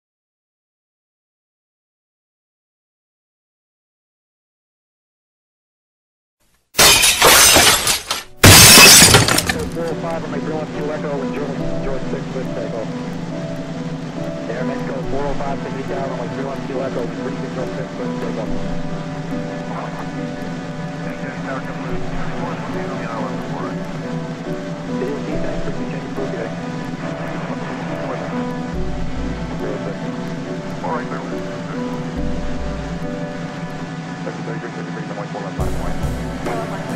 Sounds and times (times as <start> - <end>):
Shatter: 6.8 - 9.9.